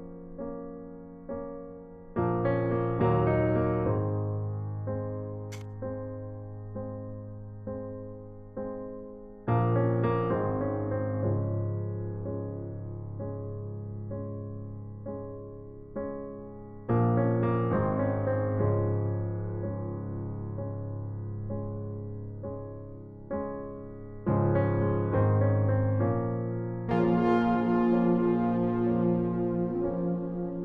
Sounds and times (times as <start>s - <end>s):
Music: 0.0s - 30.6s.